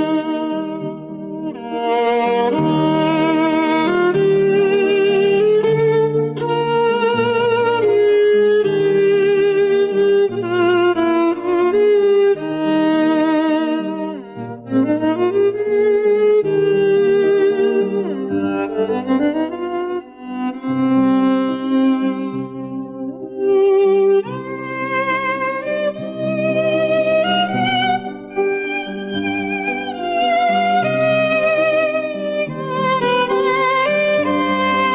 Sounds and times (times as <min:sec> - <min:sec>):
Violin, fiddle: 0:00.0 - 0:34.9.